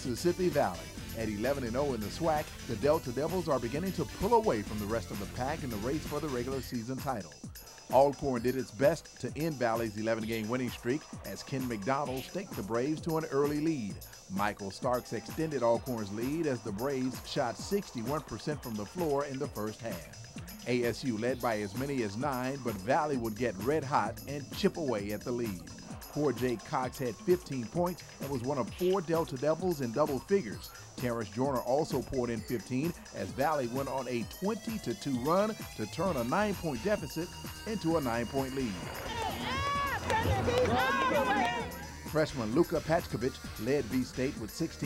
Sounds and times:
Speech: 0:00.0 - 0:38.8, 0:40.0 - 0:44.8
Music: 0:00.0 - 0:44.8.

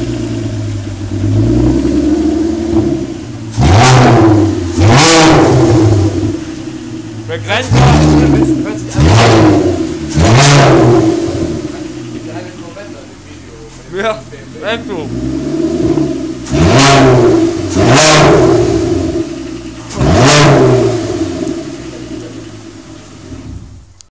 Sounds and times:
Speech: 0:07.3 - 0:09.1, 0:11.8 - 0:15.1.

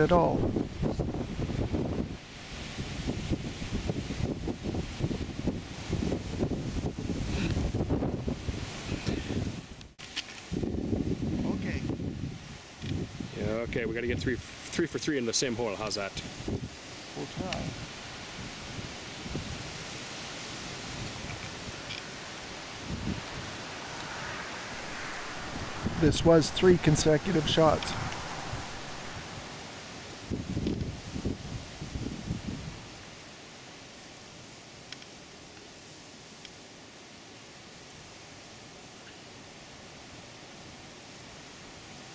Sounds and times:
Speech: 0:00.0 - 0:00.4, 0:11.4 - 0:11.9, 0:13.3 - 0:16.3, 0:17.2 - 0:17.8, 0:26.0 - 0:28.0.

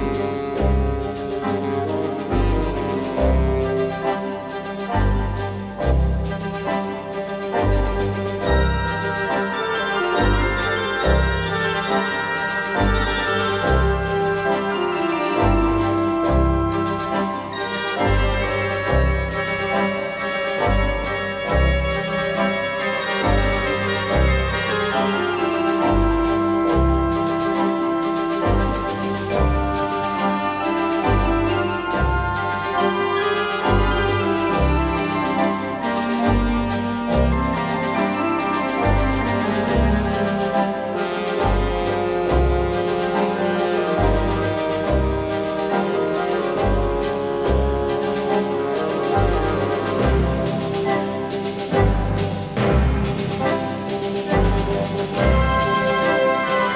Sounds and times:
Hammond organ: 0:00.0 - 0:56.7.

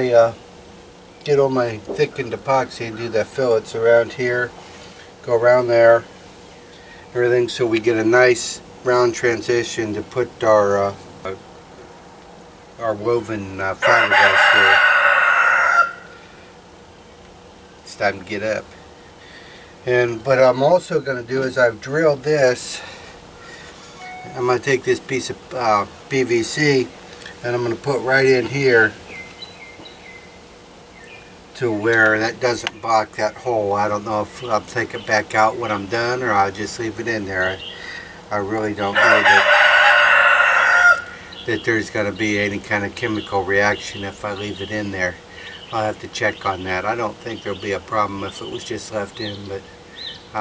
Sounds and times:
Speech: 0:00.0 - 0:00.4, 0:01.2 - 0:04.5, 0:05.2 - 0:06.1, 0:07.2 - 0:11.4, 0:12.8 - 0:14.8, 0:17.9 - 0:18.7, 0:19.8 - 0:22.9, 0:24.2 - 0:29.0, 0:31.6 - 0:37.7, 0:38.3 - 0:39.5, 0:41.5 - 0:49.6.

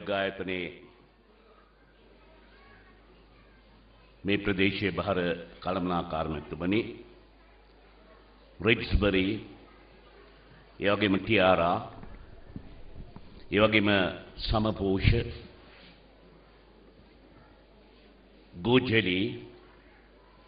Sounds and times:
Male speech, man speaking: 0:00.0 - 0:00.9, 0:04.3 - 0:07.1, 0:08.6 - 0:09.6, 0:10.8 - 0:12.0, 0:13.5 - 0:15.6, 0:18.6 - 0:19.6.

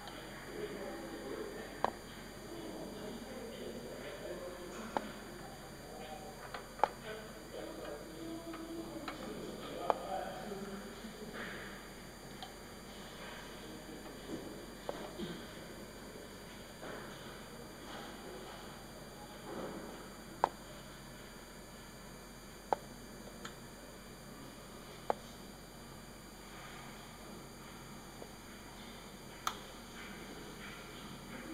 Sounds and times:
Speech: 0:00.0 - 0:21.0, 0:28.6 - 0:31.5.

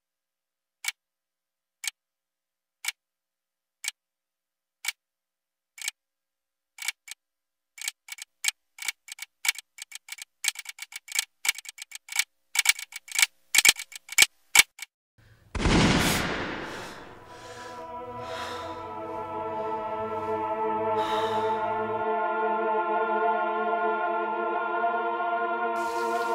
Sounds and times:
Music: 0:17.3 - 0:26.3.

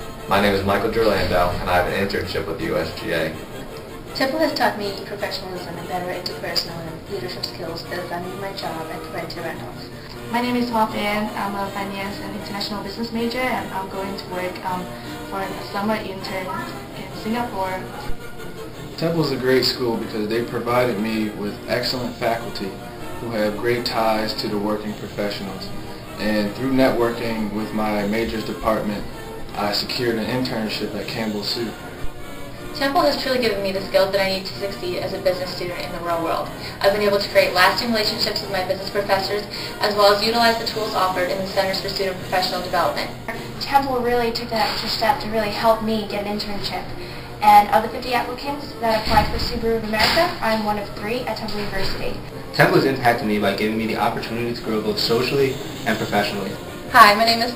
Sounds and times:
Music: 0:00.0 - 0:57.5
Speech: 0:00.3 - 0:03.4, 0:04.2 - 0:18.0, 0:19.0 - 0:31.8, 0:32.8 - 0:57.5.

